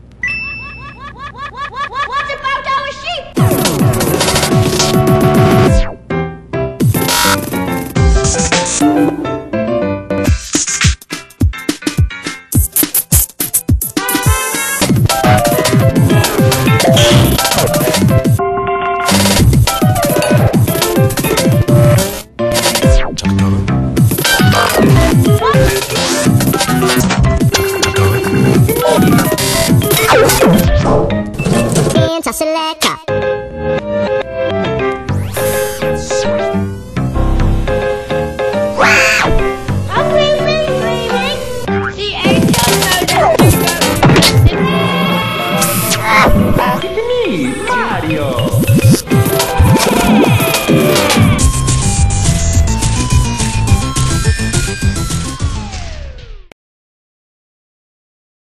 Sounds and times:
Theme music: 0:14.0 - 0:32.2, 0:33.1 - 0:56.5
Speech: 0:32.0 - 0:33.1, 0:46.2 - 0:48.6.

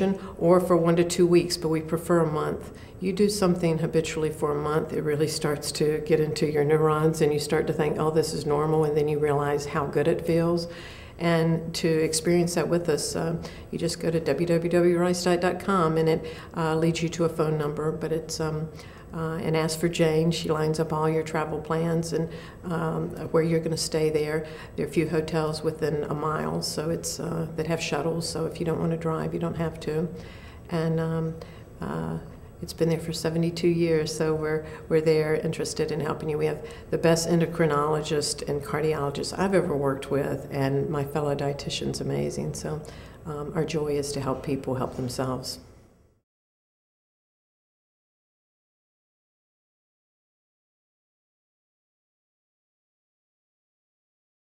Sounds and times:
Speech: 0:00.0 - 0:45.6.

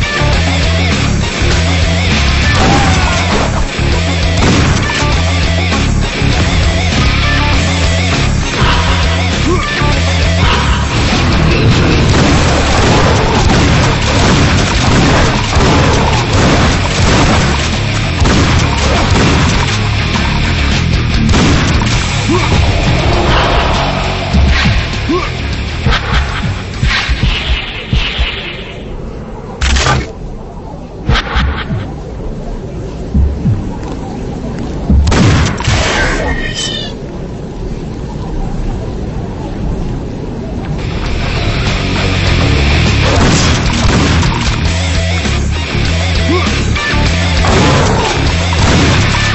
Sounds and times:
Music: 0:00.0 - 0:28.5, 0:40.8 - 0:49.3.

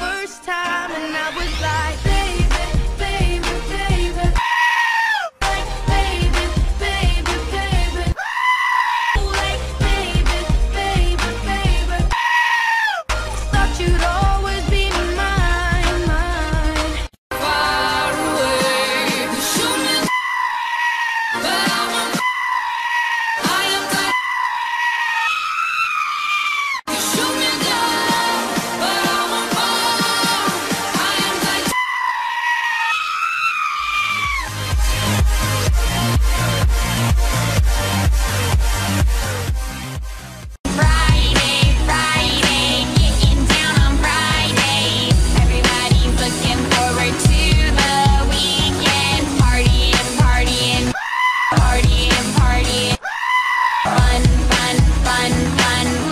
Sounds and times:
Music: 0:00.0 - 0:04.4, 0:05.4 - 0:08.2, 0:09.2 - 0:12.2, 0:13.1 - 0:20.1, 0:21.4 - 0:22.3, 0:23.4 - 0:24.2, 0:26.9 - 0:31.8, 0:34.4 - 0:51.0, 0:51.6 - 0:53.0, 0:53.9 - 0:56.1
Animal: 0:04.4 - 0:05.3, 0:08.2 - 0:09.2, 0:12.2 - 0:13.1, 0:20.1 - 0:21.4, 0:22.1 - 0:26.8, 0:31.7 - 0:34.5, 0:51.0 - 0:51.6, 0:53.0 - 0:54.0.

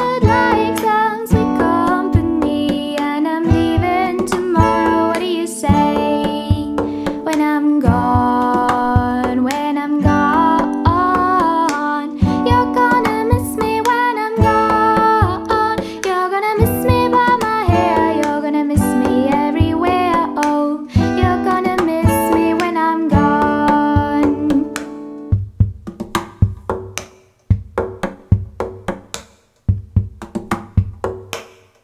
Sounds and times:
Acoustic guitar: 0:00.0 - 0:26.9
Strum: 0:00.0 - 0:26.9
Tapping (guitar technique): 0:00.0 - 0:31.4.

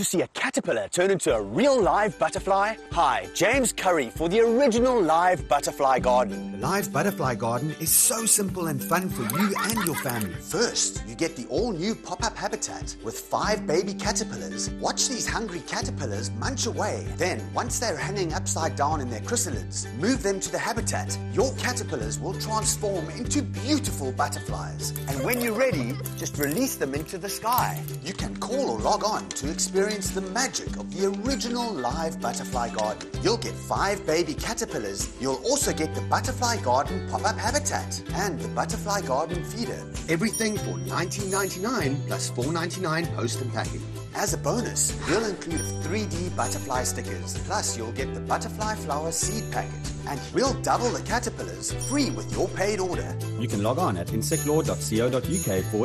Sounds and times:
Music: 0:00.0 - 0:55.8
Speech: 0:00.0 - 0:55.8.

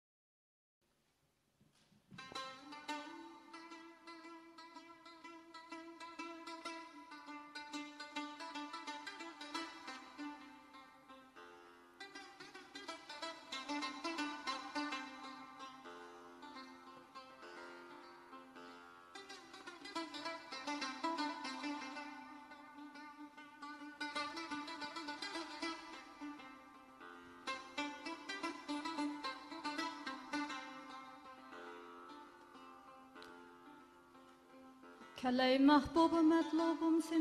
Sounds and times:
Music: 0:02.2 - 0:37.2.

